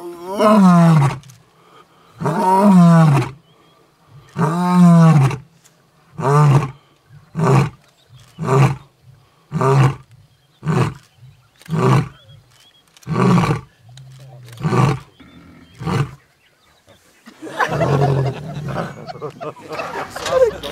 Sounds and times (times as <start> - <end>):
Roar: 0.0 - 1.3, 2.2 - 3.4, 4.2 - 5.4, 6.2 - 10.0, 10.6 - 12.3, 13.0 - 16.2, 17.6 - 19.1.